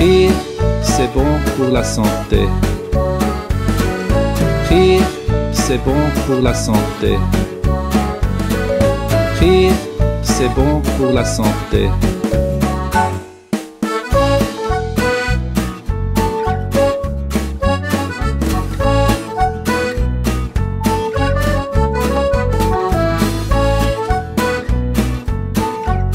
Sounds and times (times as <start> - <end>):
Speech: 0.0 - 2.6, 4.7 - 7.4, 9.4 - 12.1
Music: 0.0 - 26.1.